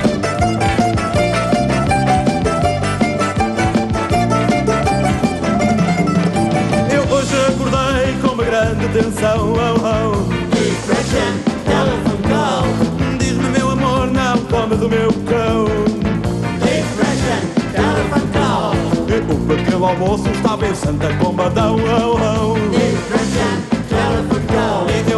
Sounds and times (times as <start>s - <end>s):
Music: 0.0s - 25.1s.